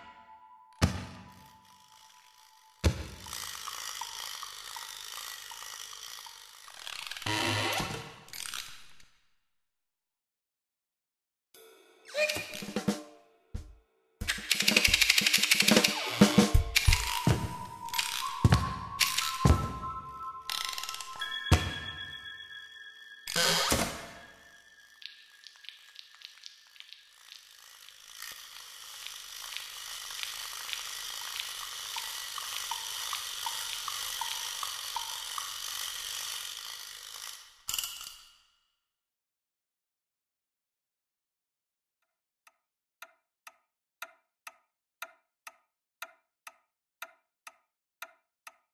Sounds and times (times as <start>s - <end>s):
Music: 0.0s - 6.5s, 11.6s - 25.8s.